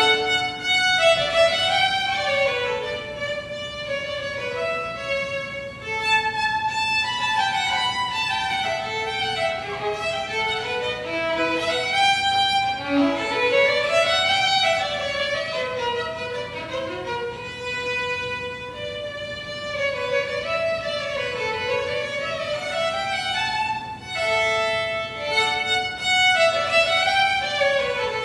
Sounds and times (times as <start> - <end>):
Violin, fiddle: 0.0 - 28.2.